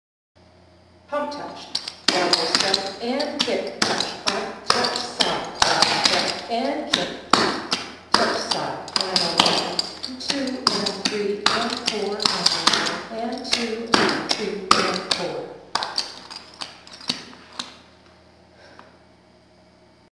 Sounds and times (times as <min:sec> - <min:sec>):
Speech: 0:01.1 - 0:07.2, 0:08.2 - 0:15.6.